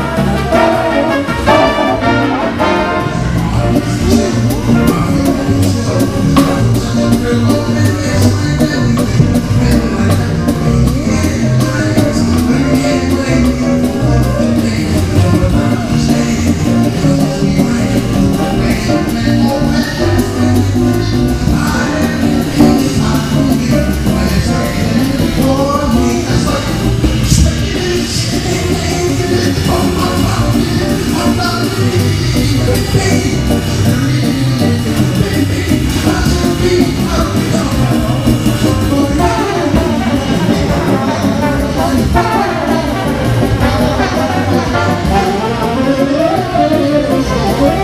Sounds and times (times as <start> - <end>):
Jazz: 0.0 - 47.8
Orchestra: 0.0 - 47.8.